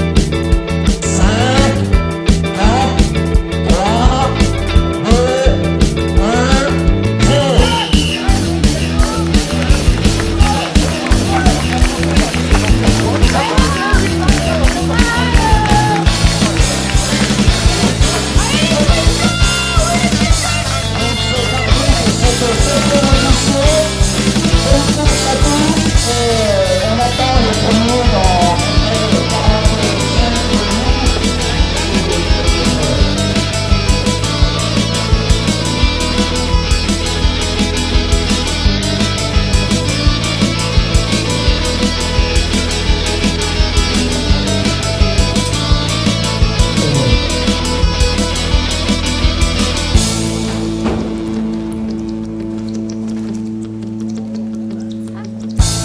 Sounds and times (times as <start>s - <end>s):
Music: 0.0s - 55.8s
Speech: 18.4s - 30.5s.